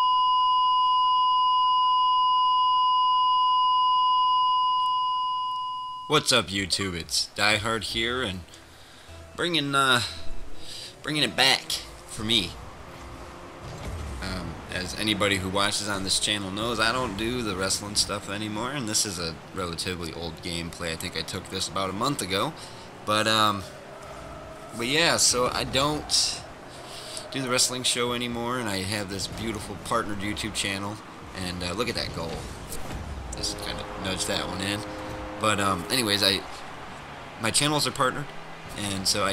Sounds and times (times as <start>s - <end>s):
Chirp tone: 0.0s - 6.1s.